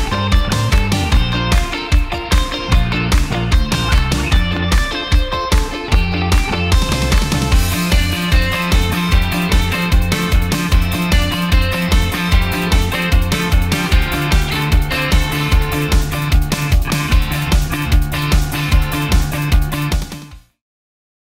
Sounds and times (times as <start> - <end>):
Music: 0.0 - 20.6.